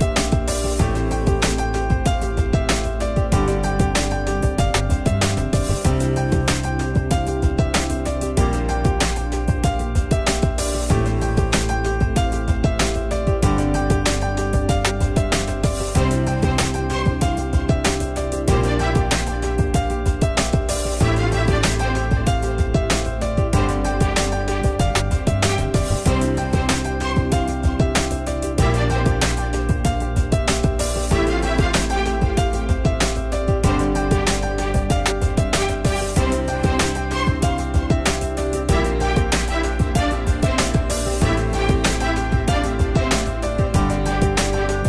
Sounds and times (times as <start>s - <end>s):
Music: 0.0s - 44.8s.